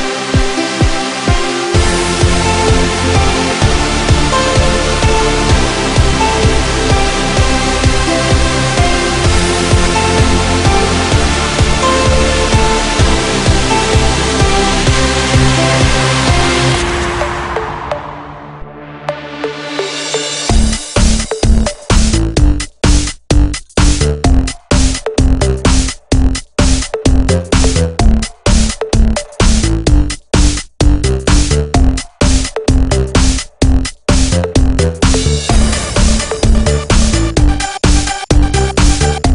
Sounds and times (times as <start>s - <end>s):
Electronic dance music: 0.0s - 39.3s.